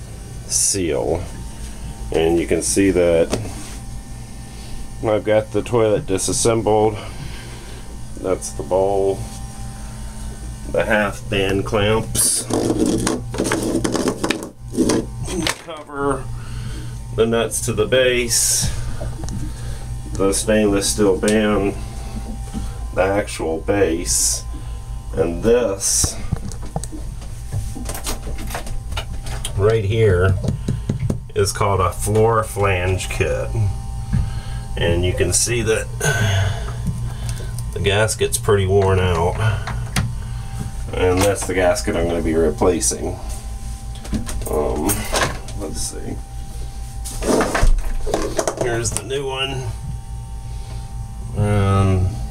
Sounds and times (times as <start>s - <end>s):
Speech: 0.5s - 1.3s, 2.1s - 3.5s, 5.0s - 7.1s, 8.2s - 9.3s, 10.7s - 12.7s, 15.2s - 16.3s, 17.2s - 18.8s, 20.2s - 21.8s, 23.0s - 24.5s, 25.1s - 26.3s, 29.5s - 30.5s, 31.3s - 33.8s, 34.8s - 36.6s, 37.7s - 39.7s, 40.9s - 43.2s, 44.4s - 46.2s, 48.6s - 49.8s, 51.4s - 52.2s.